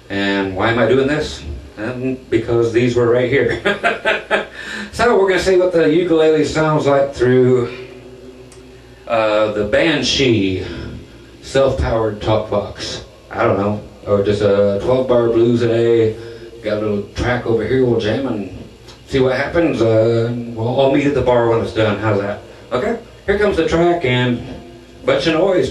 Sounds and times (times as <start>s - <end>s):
Speech: 0.0s - 8.0s, 9.1s - 25.7s.